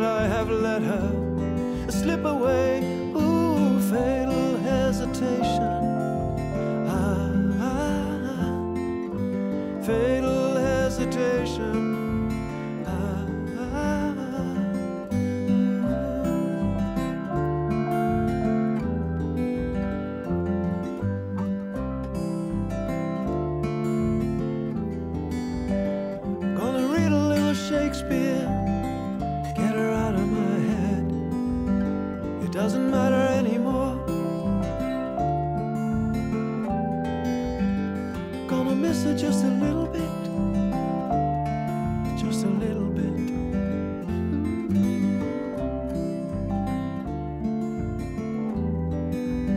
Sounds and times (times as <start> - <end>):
Acoustic guitar: 0.0 - 49.5.